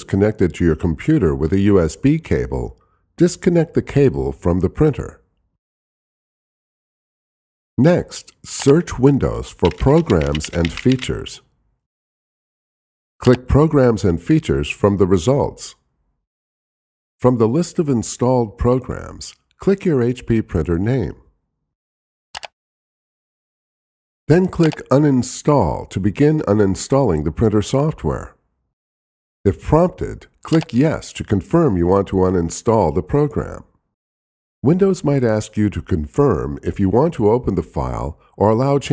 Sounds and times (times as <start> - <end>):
Speech: 0.0 - 5.2, 7.8 - 11.5, 13.2 - 15.8, 17.2 - 21.3, 24.3 - 28.4, 29.5 - 33.8, 34.6 - 38.9.